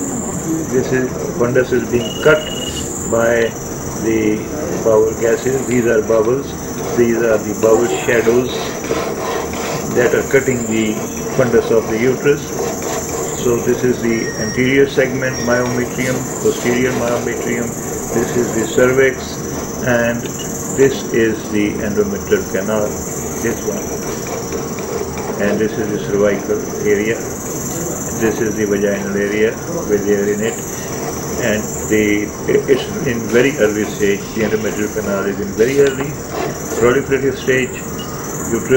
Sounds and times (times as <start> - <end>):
Speech: 0.1 - 8.8, 9.9 - 12.6, 13.4 - 23.9, 25.4 - 30.7, 31.4 - 36.2, 36.8 - 37.8, 38.5 - 38.7.